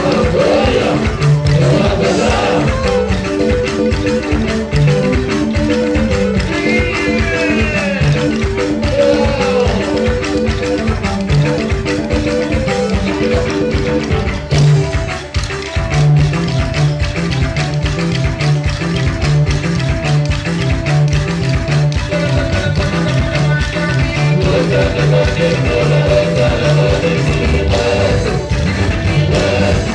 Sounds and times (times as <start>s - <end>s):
Folk music: 0.0s - 29.9s.